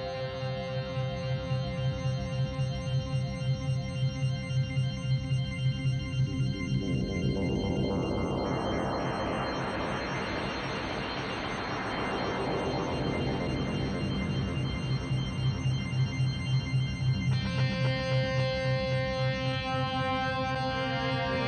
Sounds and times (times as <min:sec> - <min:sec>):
Music: 0:00.0 - 0:21.4.